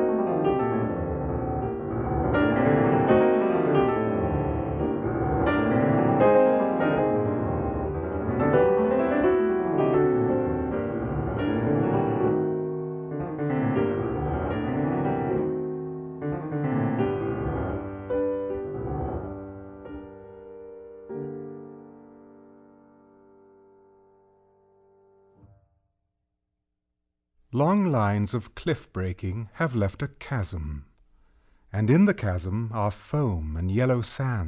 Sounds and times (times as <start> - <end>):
Music: 0.0 - 26.2.